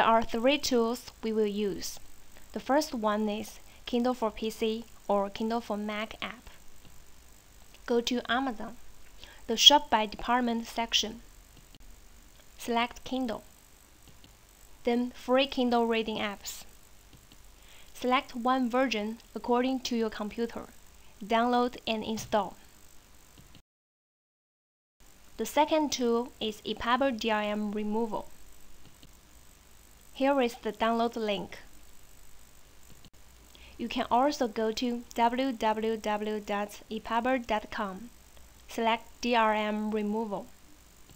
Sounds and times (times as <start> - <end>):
Narration, monologue: 0.0 - 23.6, 25.1 - 41.1.